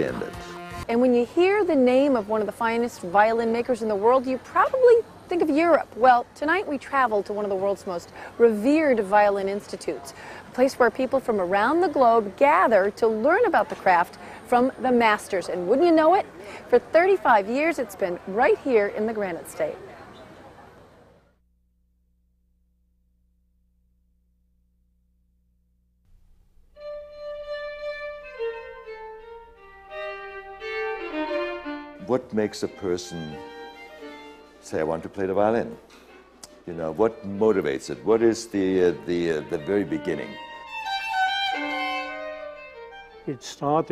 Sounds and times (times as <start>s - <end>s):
Speech: 0.0s - 19.8s, 43.3s - 43.9s.